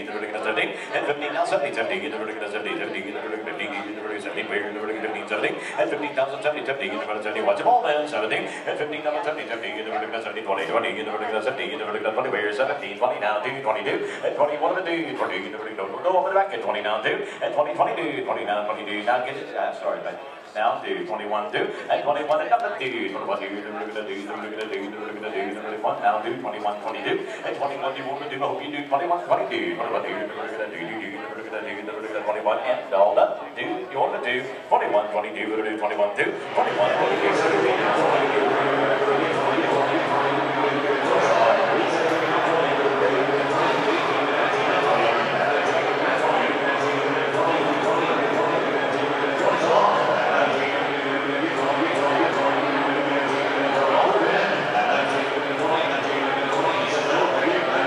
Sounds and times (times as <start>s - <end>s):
Speech: 0.0s - 57.8s.